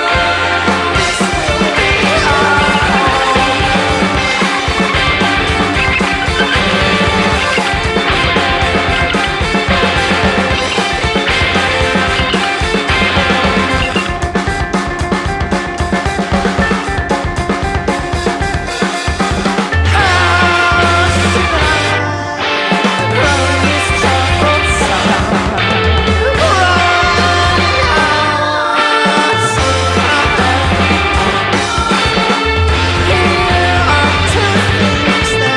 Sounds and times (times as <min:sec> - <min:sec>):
Grunge: 0:00.0 - 0:35.5.